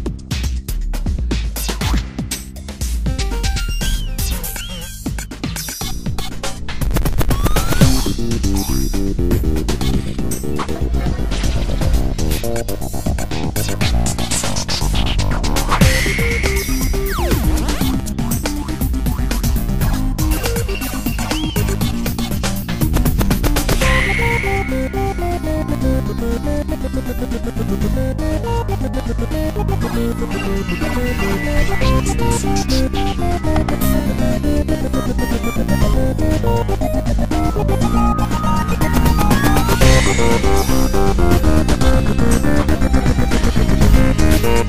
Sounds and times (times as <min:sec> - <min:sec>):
Funny music: 0:00.0 - 0:44.6.